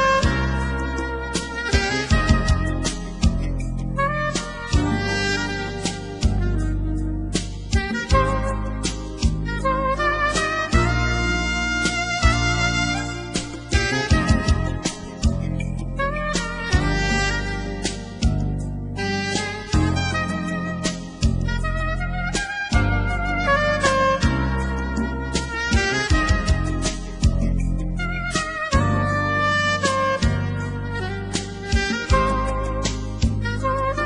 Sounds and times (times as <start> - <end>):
Music: 0.0 - 34.0.